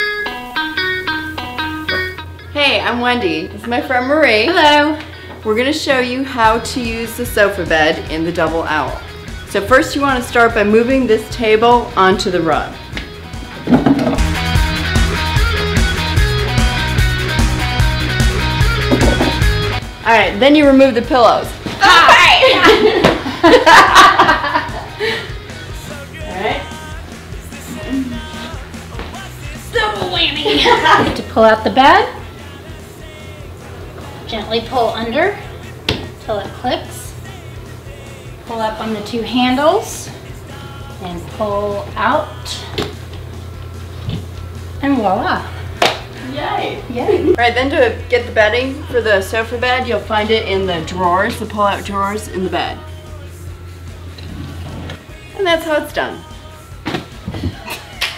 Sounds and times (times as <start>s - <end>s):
Music: 0.0s - 58.1s.